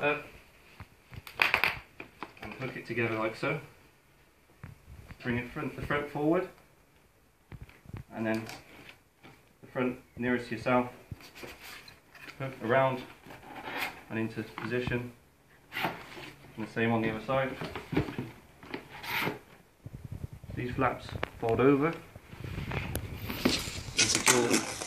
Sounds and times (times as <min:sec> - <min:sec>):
Speech: 0:00.0 - 0:00.3, 0:02.4 - 0:03.8, 0:05.2 - 0:06.6, 0:08.1 - 0:08.6, 0:09.6 - 0:11.0, 0:12.3 - 0:13.1, 0:14.1 - 0:15.2, 0:16.6 - 0:17.8, 0:20.6 - 0:22.1, 0:24.0 - 0:24.8.